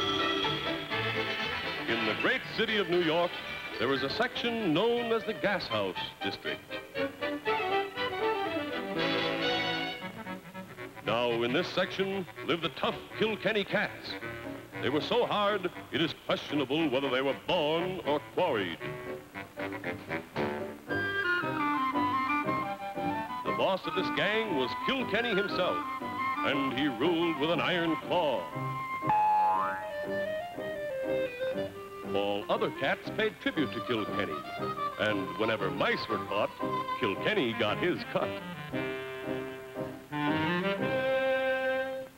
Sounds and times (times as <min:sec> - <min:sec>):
Music: 0:00.0 - 0:42.1
Speech: 0:01.9 - 0:06.6, 0:11.1 - 0:14.2, 0:14.8 - 0:18.8, 0:23.5 - 0:25.8, 0:26.4 - 0:28.6, 0:32.1 - 0:38.4.